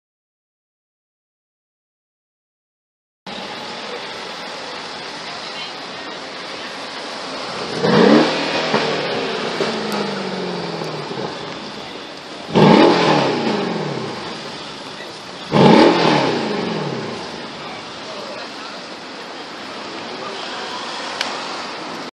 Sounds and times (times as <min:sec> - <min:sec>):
Speech: 0:03.4 - 0:07.5, 0:17.4 - 0:21.2.